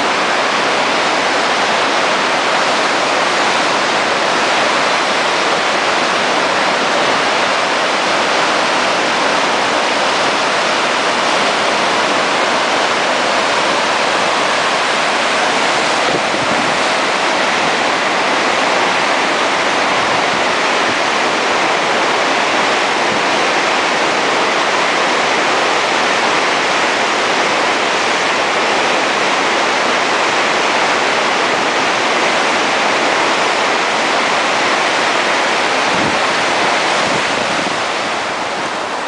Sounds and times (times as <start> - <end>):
Stream: 0.0 - 39.0.